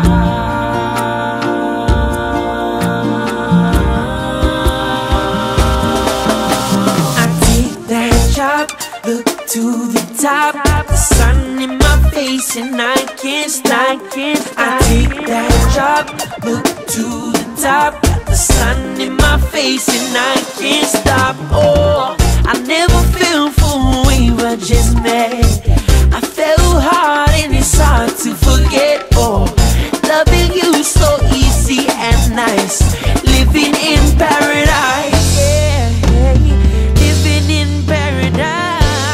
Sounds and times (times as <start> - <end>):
Music of Africa: 0.0 - 39.1.